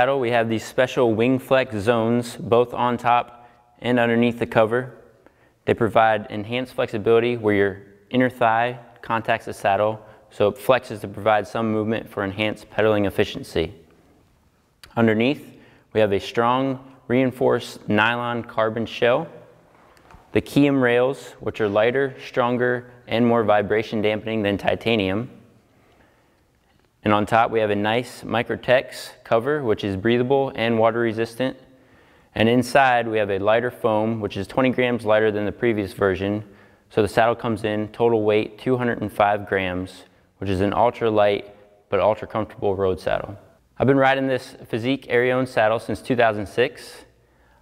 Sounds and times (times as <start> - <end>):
Speech: 0.0 - 5.0, 5.6 - 13.8, 14.8 - 19.5, 20.3 - 25.4, 27.0 - 31.7, 32.3 - 47.2.